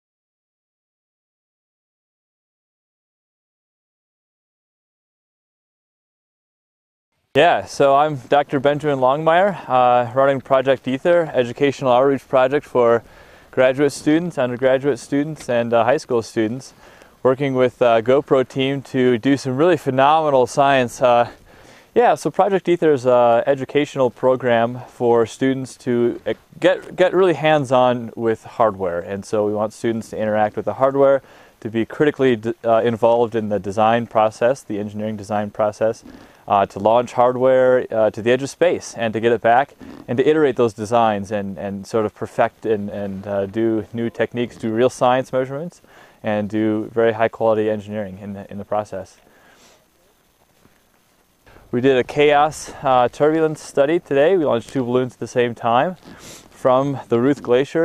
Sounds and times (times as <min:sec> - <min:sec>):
Speech: 0:07.4 - 0:21.4, 0:22.0 - 0:49.2, 0:51.7 - 0:56.0, 0:56.6 - 0:57.8.